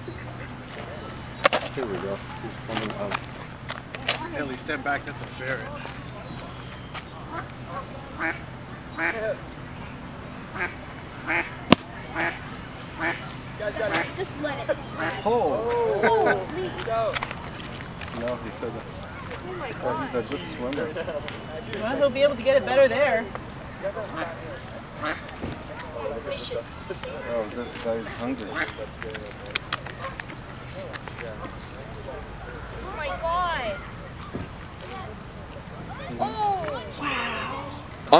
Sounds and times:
Duck: 7.3s - 8.4s, 10.6s - 11.5s, 12.2s - 12.4s, 13.0s - 13.3s, 25.0s - 25.2s.

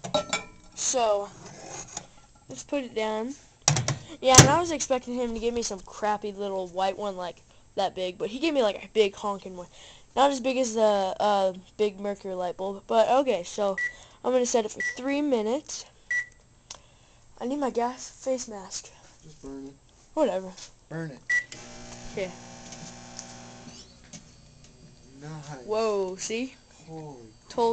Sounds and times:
Inside, small room: 0.0s - 27.7s
Microwave oven: 21.3s - 25.6s.

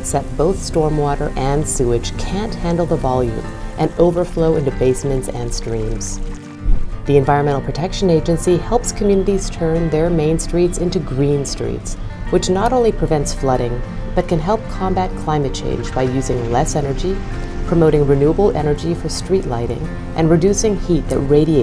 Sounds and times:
Speech: 0.0s - 6.2s, 7.1s - 21.6s
Music: 0.0s - 21.6s.

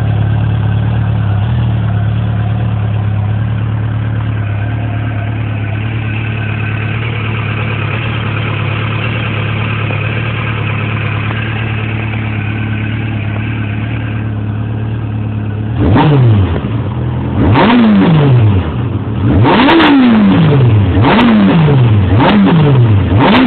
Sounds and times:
Medium engine (mid frequency): 0.0s - 23.4s
Vehicle: 0.0s - 23.4s.

